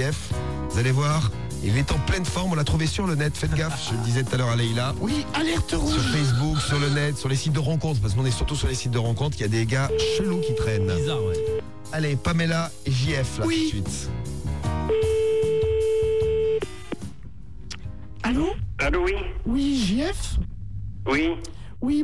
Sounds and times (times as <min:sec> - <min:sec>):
Music: 0:00.0 - 0:20.4
Speech: 0:00.8 - 0:14.1.